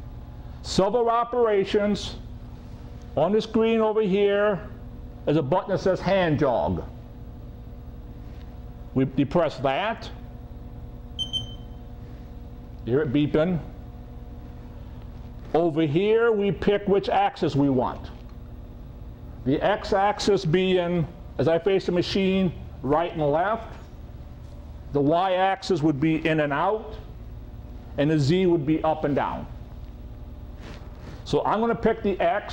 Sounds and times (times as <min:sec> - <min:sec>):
Speech: 0:00.6 - 0:02.2, 0:03.2 - 0:04.7, 0:05.3 - 0:07.0, 0:09.0 - 0:10.2, 0:12.8 - 0:13.8, 0:15.5 - 0:18.2, 0:19.4 - 0:23.8, 0:24.9 - 0:27.1, 0:28.0 - 0:29.6, 0:31.2 - 0:32.5.